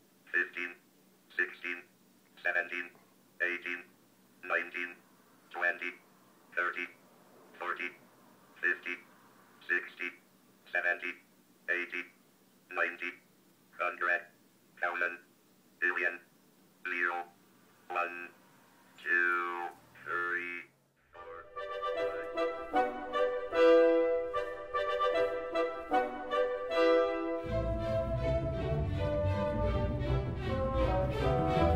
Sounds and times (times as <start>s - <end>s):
Speech synthesizer: 0.3s - 0.8s, 1.4s - 5.0s, 5.6s - 6.0s, 6.6s - 7.0s, 7.6s - 8.0s, 8.6s - 9.1s, 9.7s - 13.2s, 13.8s - 16.3s, 16.9s - 17.3s, 17.9s - 18.4s, 19.0s - 21.6s
Music: 21.2s - 31.7s.